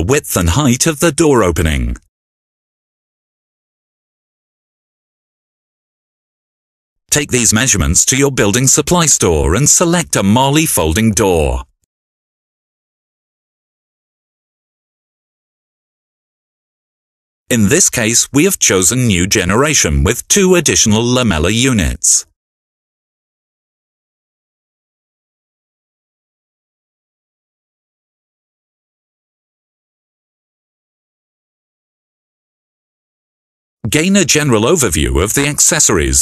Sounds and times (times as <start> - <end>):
Speech: 0.0 - 2.1, 7.1 - 11.7, 17.5 - 22.4, 33.9 - 36.2.